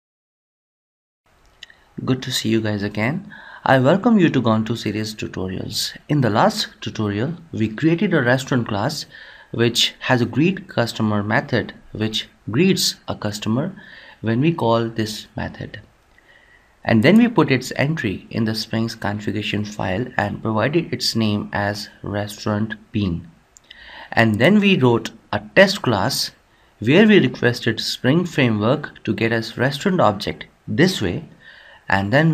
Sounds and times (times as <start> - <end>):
Inside, small room: 1.3 - 32.3
Speech: 2.0 - 15.9, 16.8 - 23.4, 24.1 - 32.3.